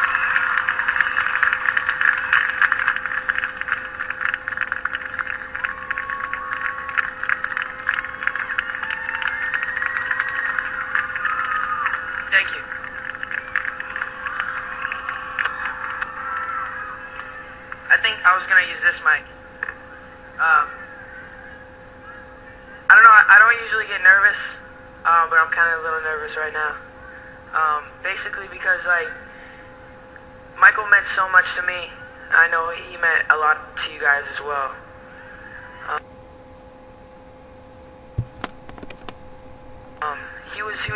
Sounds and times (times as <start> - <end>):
Male speech, man speaking: 12.3 - 12.6, 17.9 - 19.3, 20.4 - 20.7, 22.9 - 26.8, 27.6 - 29.2, 30.6 - 34.8, 40.0 - 40.9.